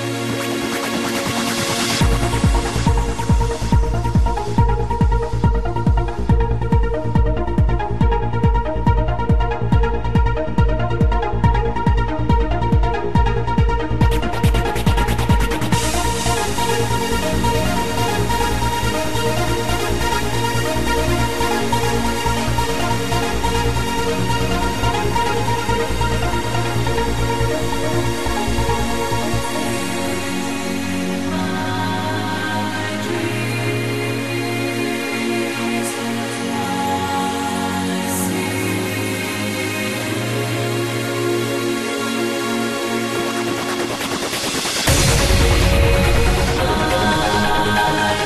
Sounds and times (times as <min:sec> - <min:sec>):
Music: 0:00.0 - 0:48.2.